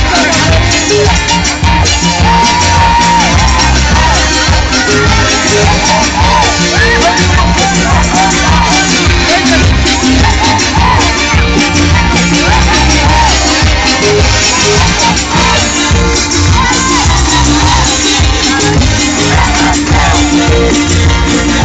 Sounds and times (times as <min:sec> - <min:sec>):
Dance music: 0:00.0 - 0:21.6.